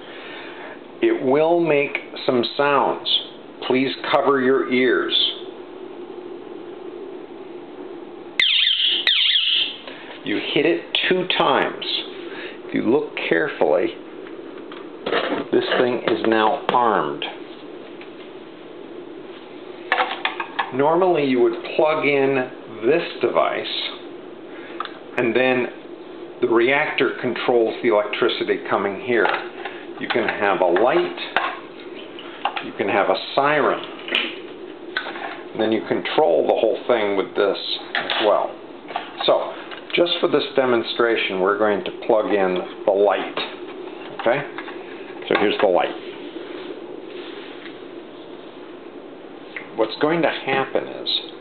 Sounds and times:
Speech: 0:01.0 - 0:05.5, 0:10.2 - 0:14.0, 0:15.4 - 0:17.4, 0:20.7 - 0:24.0, 0:25.1 - 0:25.8, 0:26.4 - 0:29.4, 0:30.0 - 0:31.4, 0:32.6 - 0:33.9, 0:35.6 - 0:38.6, 0:39.2 - 0:43.6, 0:44.2 - 0:44.6, 0:45.2 - 0:46.0, 0:49.7 - 0:51.4.

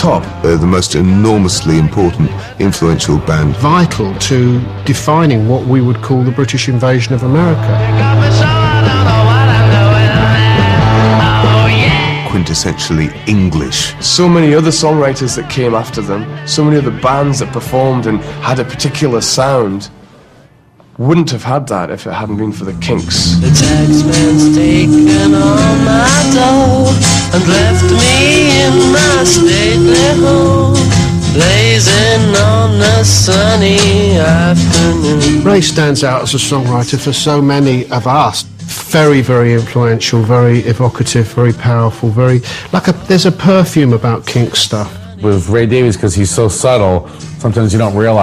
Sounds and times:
Speech: 0:00.0 - 0:07.7, 0:12.2 - 0:19.9, 0:21.0 - 0:23.4, 0:35.4 - 0:48.2
Music: 0:00.0 - 0:48.2.

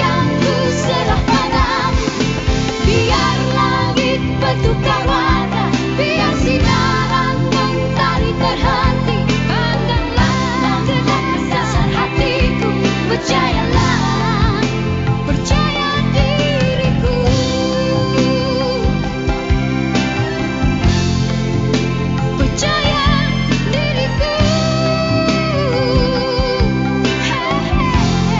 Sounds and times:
Pop music: 0:00.0 - 0:28.3.

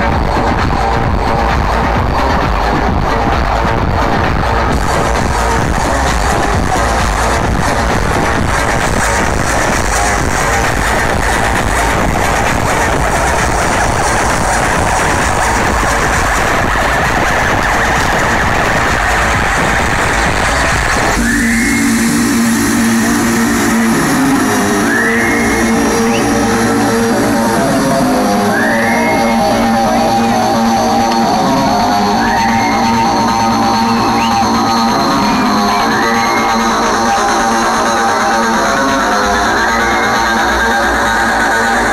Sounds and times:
Dance music: 0:00.0 - 0:41.9
Exciting music: 0:00.0 - 0:41.9.

